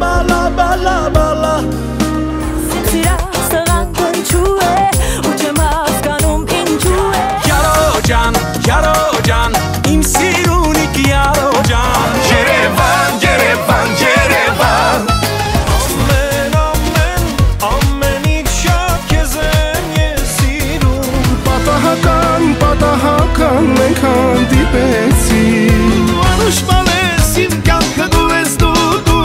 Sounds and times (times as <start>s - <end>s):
Blues: 0.0s - 29.2s.